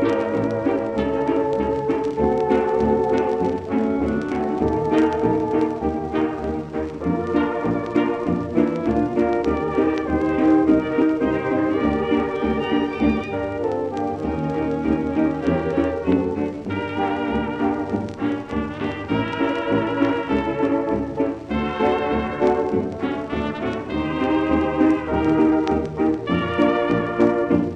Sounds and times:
Jazz: 0.0 - 27.7.

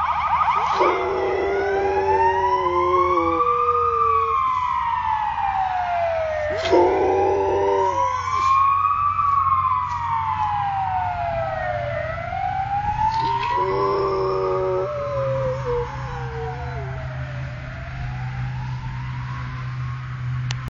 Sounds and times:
Howl: 0.0 - 4.7, 6.1 - 8.7, 13.1 - 17.2.

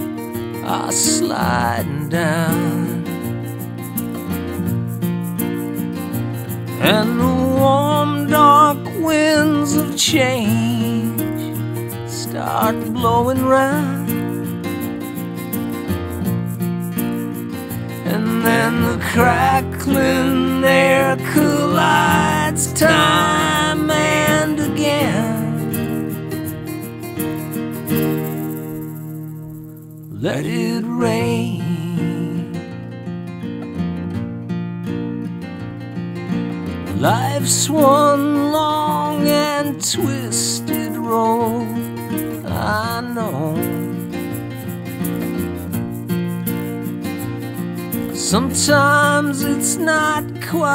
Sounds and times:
Music: 0.0 - 50.7.

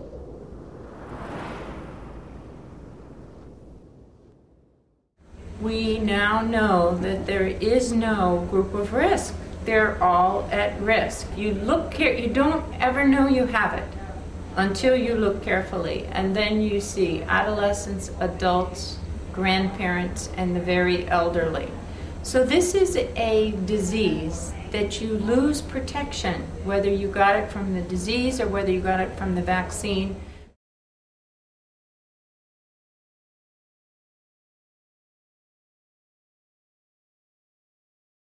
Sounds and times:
Female speech, woman speaking: 5.6 - 30.2.

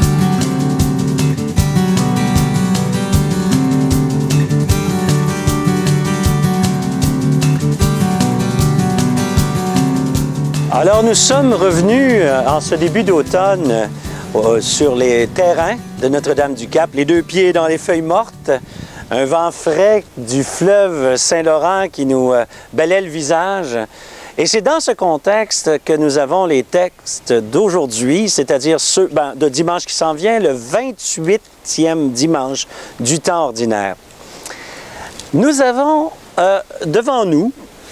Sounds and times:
Speech: 10.7 - 34.0, 35.3 - 37.6.

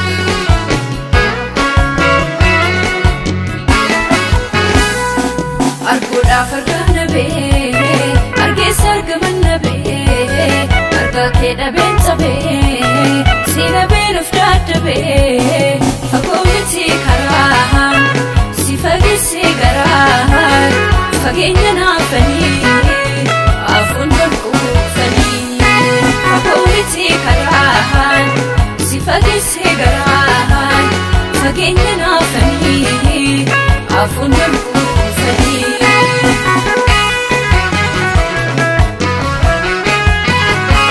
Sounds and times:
Music: 0.0 - 40.9.

